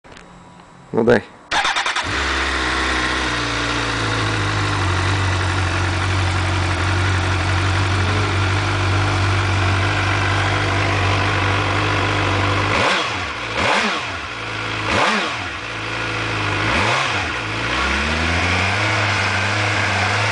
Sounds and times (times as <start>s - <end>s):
Outside, urban or manmade: 0.0s - 20.3s
Speech: 0.9s - 1.4s
Motorcycle: 1.5s - 20.3s.